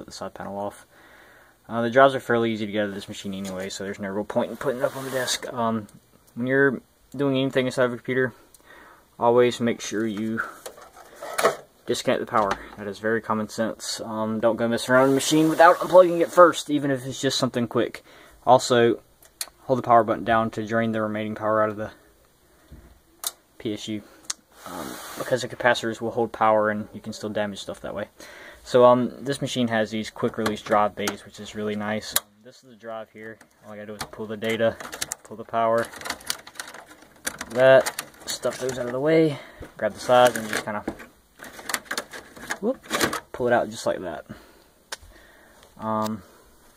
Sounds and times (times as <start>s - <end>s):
Speech: 0.0s - 0.9s, 1.7s - 8.4s, 9.2s - 10.6s, 11.9s - 19.0s, 19.6s - 22.0s, 23.6s - 36.0s, 37.4s - 41.0s, 42.5s - 44.4s, 45.8s - 46.3s
Inside, small room: 0.0s - 46.7s.